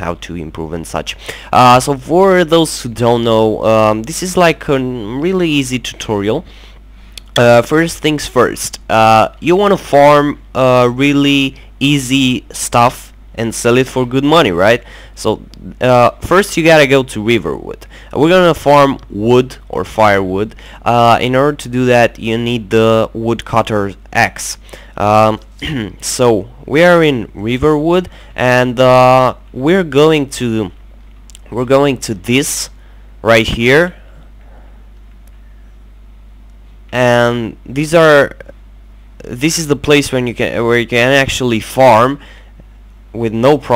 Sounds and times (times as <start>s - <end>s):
Speech: 0.0s - 6.5s, 7.2s - 34.0s, 36.9s - 38.6s, 39.2s - 42.2s, 43.1s - 43.7s.